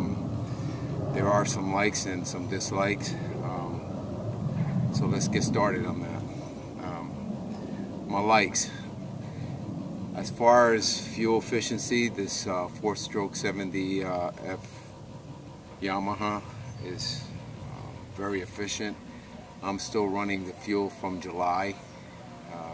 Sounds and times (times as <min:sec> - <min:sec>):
Speech: 0:00.0 - 0:00.2, 0:01.1 - 0:03.8, 0:05.0 - 0:07.1, 0:08.1 - 0:08.9, 0:10.2 - 0:14.9, 0:15.8 - 0:22.7.